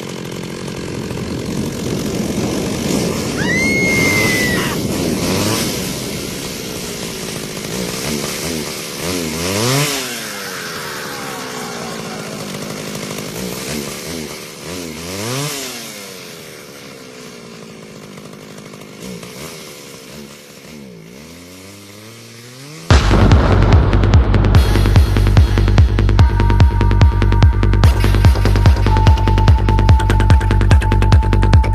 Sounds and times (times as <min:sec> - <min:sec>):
Chainsaw: 0:00.0 - 0:31.7.